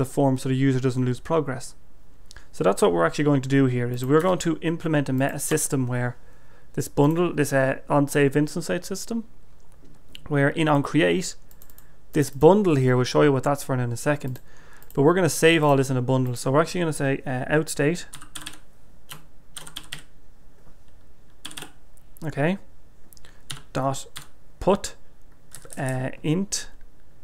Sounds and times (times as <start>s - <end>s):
Speech: 0.0s - 1.8s, 2.5s - 6.2s, 6.8s - 9.3s, 10.2s - 11.4s, 12.1s - 14.4s, 15.0s - 18.2s, 22.2s - 22.7s, 23.7s - 25.0s, 25.7s - 26.8s
Computer keyboard: 11.5s - 11.9s, 14.2s - 15.0s, 18.1s - 20.1s, 21.4s - 21.8s, 23.5s - 24.3s, 25.5s - 26.0s.